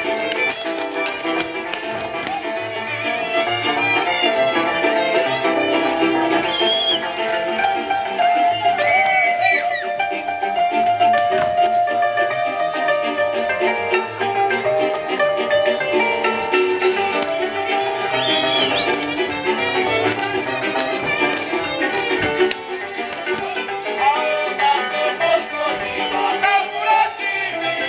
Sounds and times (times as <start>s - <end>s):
Music: 0.0s - 27.8s.